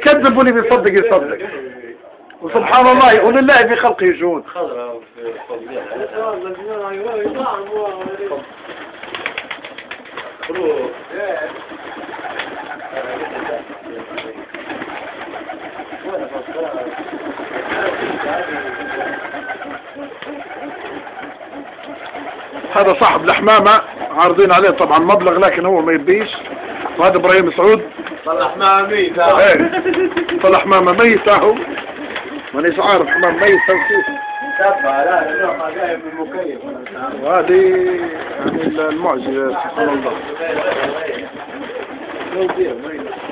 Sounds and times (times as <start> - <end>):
Coo: 15.4 - 22.3.